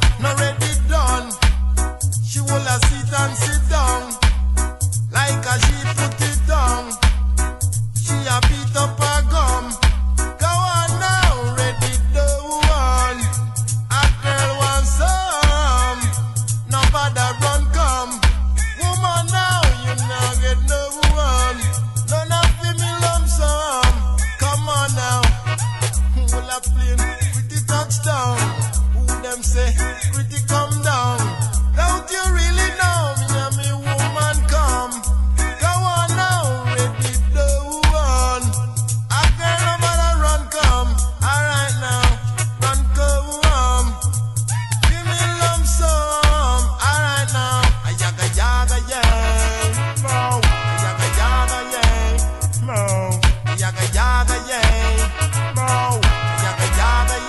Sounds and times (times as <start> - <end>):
Reggae: 0.0 - 57.2.